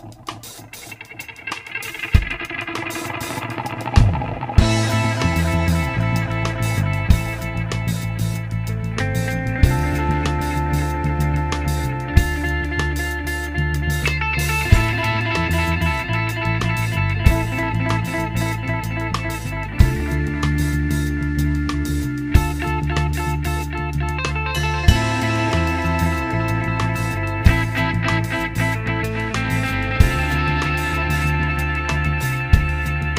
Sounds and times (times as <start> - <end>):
Music: 0.0 - 33.1.